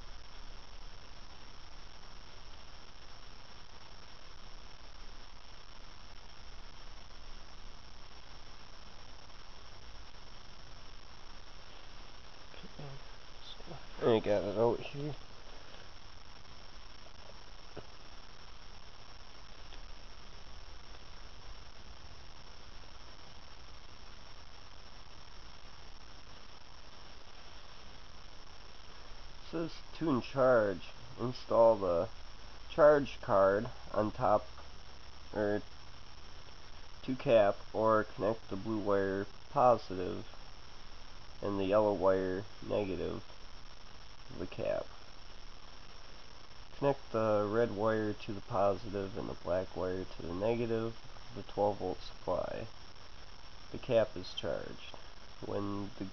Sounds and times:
Speech: 12.5 - 15.2, 29.5 - 32.1, 32.7 - 34.5, 35.3 - 35.6, 37.0 - 40.3, 41.4 - 43.2, 44.3 - 44.9, 46.8 - 52.7, 53.7 - 56.1.

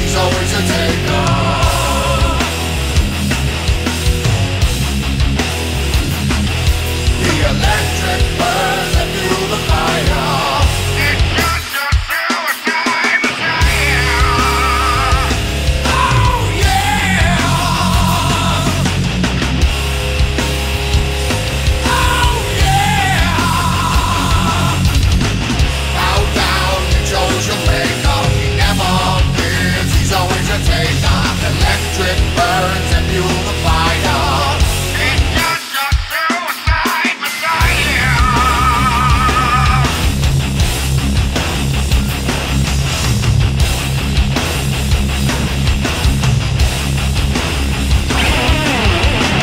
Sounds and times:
Punk rock: 0.0 - 49.4.

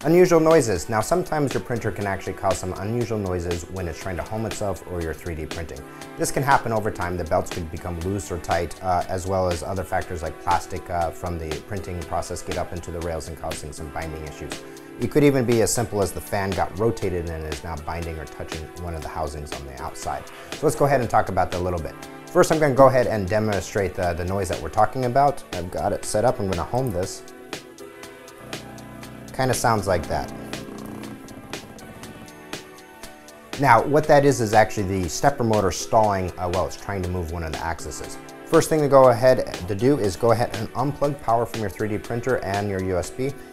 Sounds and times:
Speech: 0.0 - 27.2, 29.4 - 30.3, 33.6 - 43.4
Music: 0.0 - 43.5.

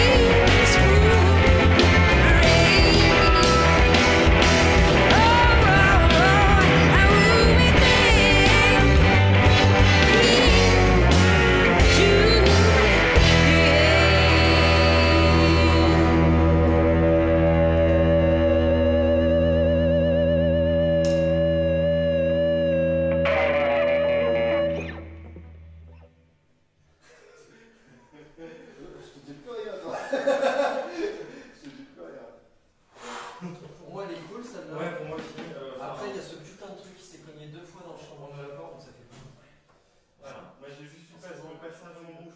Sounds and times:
Musical instrument: 0.0 - 25.8
Distortion: 0.0 - 27.2.

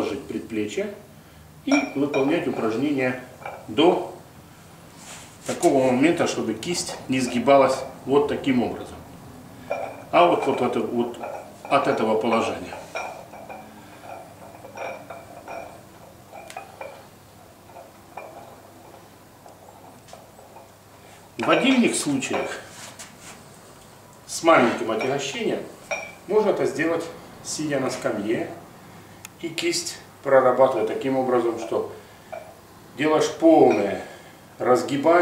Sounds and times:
Speech: 0.0 - 1.1, 1.7 - 4.2, 5.5 - 9.0, 10.1 - 12.8, 21.4 - 22.7, 24.3 - 25.7, 26.3 - 28.6, 29.4 - 32.0, 33.0 - 35.2.

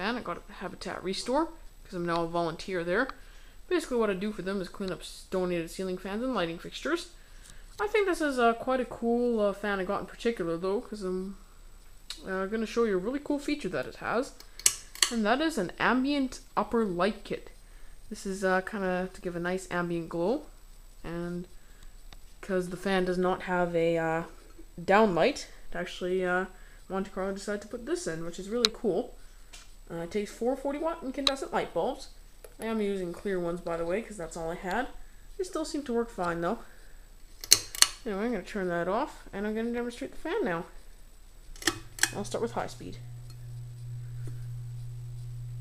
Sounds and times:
Speech: 0.0 - 7.2, 7.8 - 11.4, 12.1 - 14.4, 15.1 - 21.5, 22.4 - 29.2, 29.9 - 36.8, 38.0 - 40.8, 42.1 - 43.0.

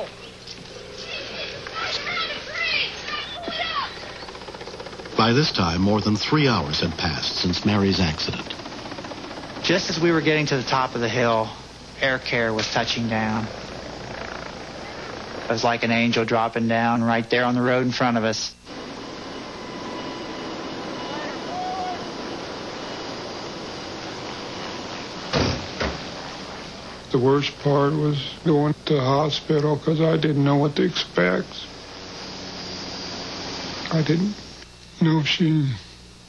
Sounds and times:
Outside, rural or natural: 0.0 - 16.2, 18.5 - 34.7
Speech: 5.2 - 8.5, 9.6 - 13.5, 27.1 - 31.7, 35.0 - 35.9.

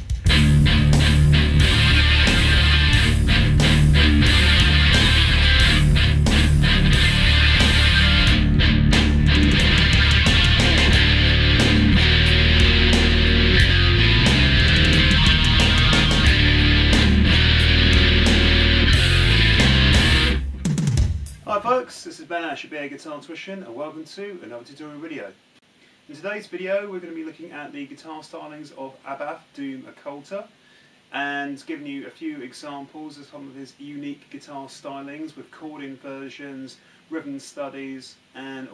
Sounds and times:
Music: 0.0 - 21.5
Speech: 21.5 - 25.4, 26.1 - 30.5, 31.1 - 38.7.

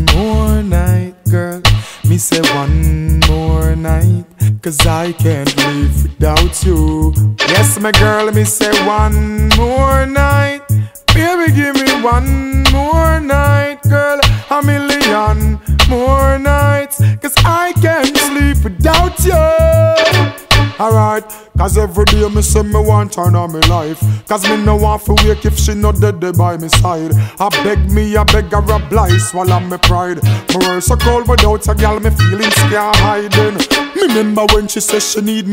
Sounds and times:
Music: 0.0 - 35.5.

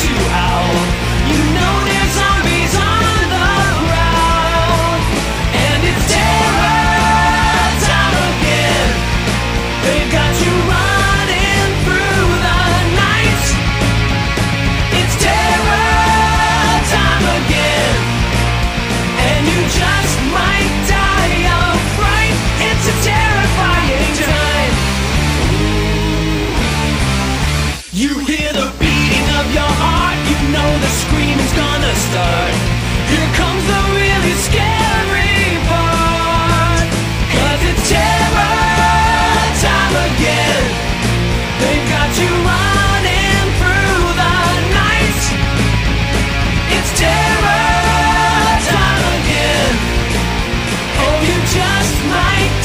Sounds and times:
Music: 0.0 - 52.6.

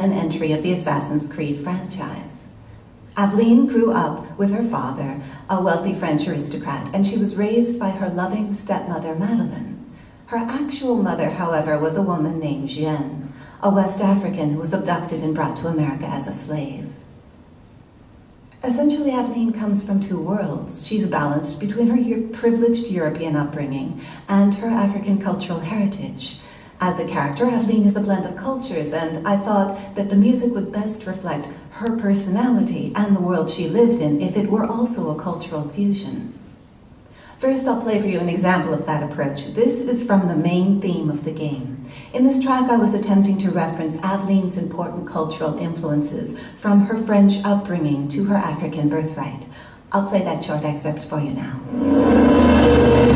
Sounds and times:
Speech: 0.0 - 17.0, 18.6 - 36.4, 37.4 - 51.7.

